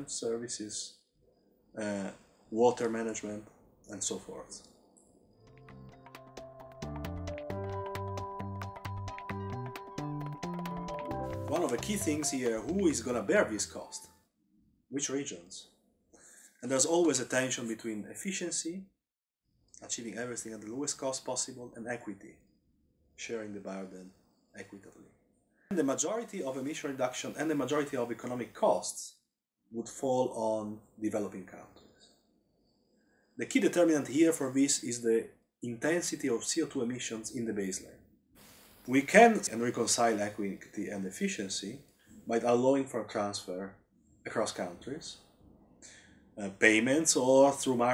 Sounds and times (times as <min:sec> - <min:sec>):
Speech: 0:00.0 - 0:01.0, 0:01.8 - 0:04.7, 0:11.5 - 0:14.1, 0:14.9 - 0:15.7, 0:16.6 - 0:18.9, 0:19.8 - 0:22.4, 0:23.2 - 0:25.1, 0:25.7 - 0:31.8, 0:33.4 - 0:38.0, 0:38.9 - 0:45.2, 0:46.4 - 0:47.9
Inside, small room: 0:00.0 - 0:47.9.